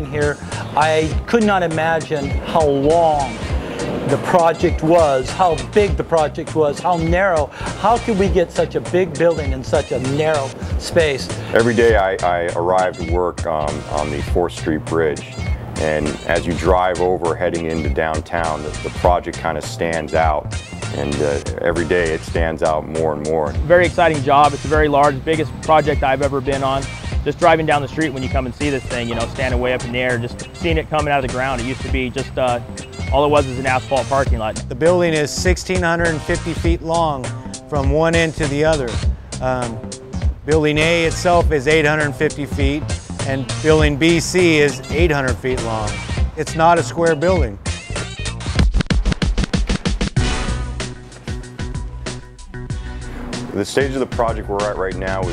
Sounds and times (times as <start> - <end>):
Speech: 0.0 - 3.4, 4.1 - 15.2, 15.8 - 20.4, 21.0 - 39.8, 40.5 - 47.6, 53.6 - 55.3
Music: 0.0 - 55.3.